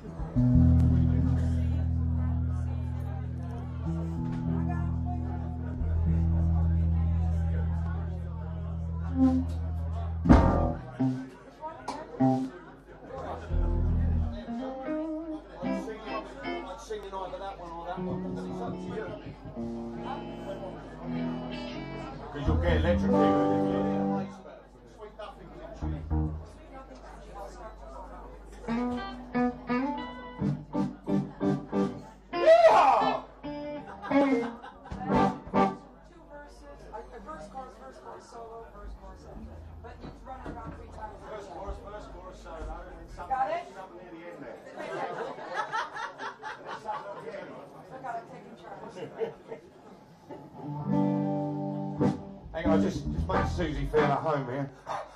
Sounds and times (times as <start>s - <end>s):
Speech: 0.0s - 50.5s, 52.4s - 55.1s.